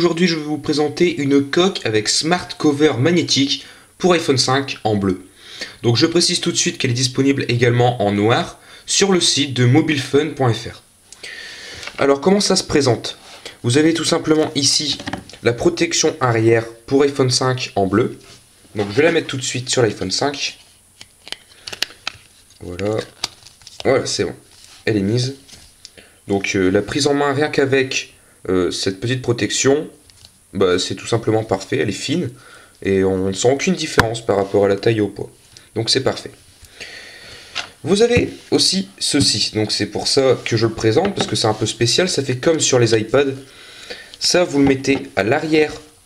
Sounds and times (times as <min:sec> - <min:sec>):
Speech: 0:00.0 - 0:10.9, 0:12.0 - 0:20.6, 0:22.6 - 0:23.2, 0:23.8 - 0:25.5, 0:26.3 - 0:36.4, 0:37.8 - 0:43.5, 0:44.2 - 0:46.0.